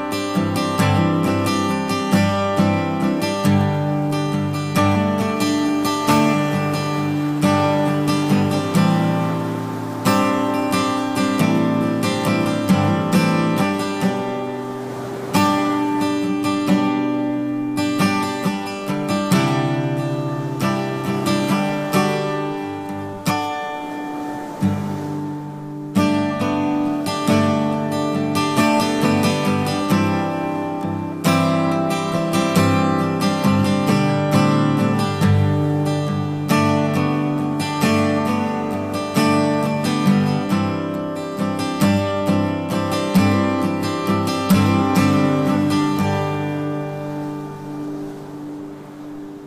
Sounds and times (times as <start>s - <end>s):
Acoustic guitar: 0.0s - 49.4s.